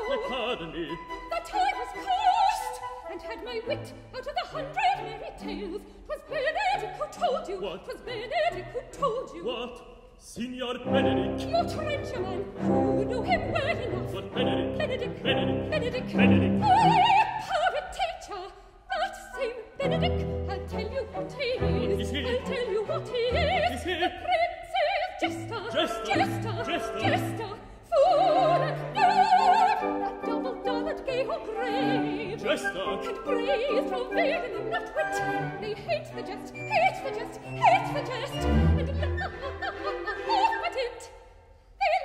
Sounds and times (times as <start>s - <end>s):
Opera: 0.0s - 42.0s
Orchestra: 0.0s - 42.0s.